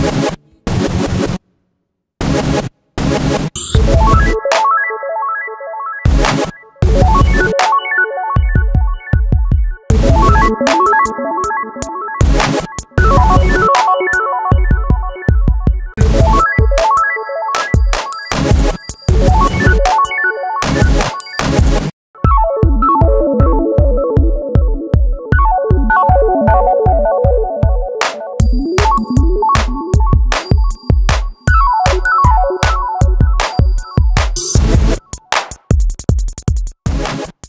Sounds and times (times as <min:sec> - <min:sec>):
Techno: 0:02.2 - 0:04.9, 0:06.1 - 0:37.4.